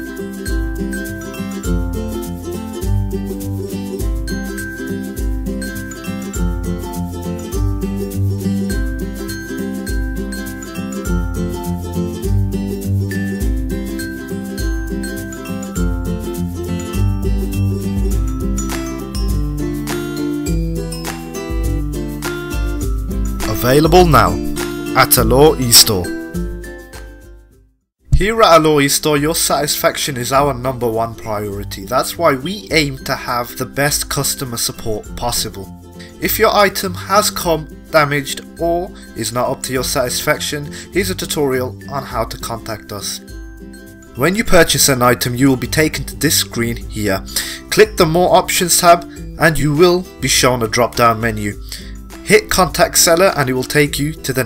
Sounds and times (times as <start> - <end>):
Music: 0.0 - 54.4
Speech: 23.4 - 26.2, 28.1 - 43.2, 44.2 - 51.6, 52.3 - 54.4.